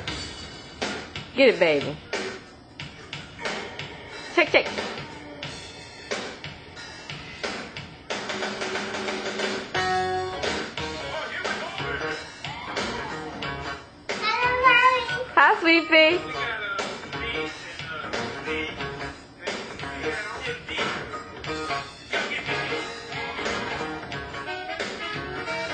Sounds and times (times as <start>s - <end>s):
Music: 0.0s - 25.7s
Speech: 1.4s - 2.0s, 4.4s - 4.8s, 14.2s - 16.2s
Male singing: 11.0s - 12.7s, 15.8s - 21.4s, 22.1s - 22.9s.